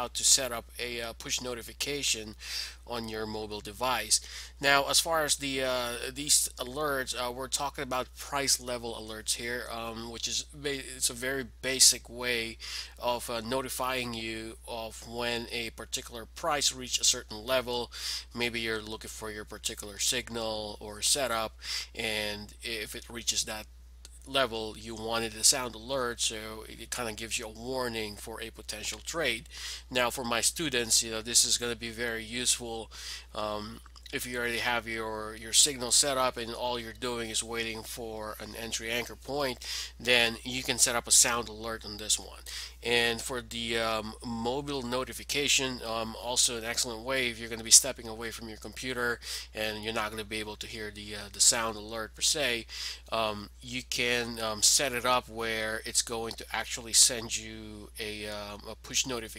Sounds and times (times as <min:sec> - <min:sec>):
Speech: 0:00.0 - 0:59.3.